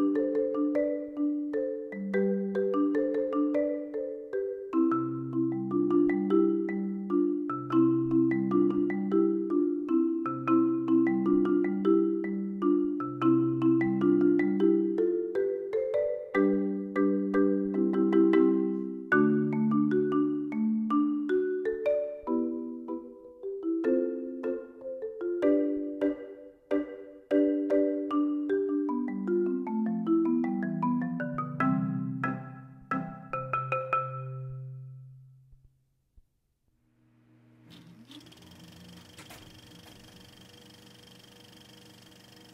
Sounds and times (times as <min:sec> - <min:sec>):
Marimba, xylophone: 0:00.0 - 0:35.2
Glockenspiel: 0:00.0 - 0:35.3.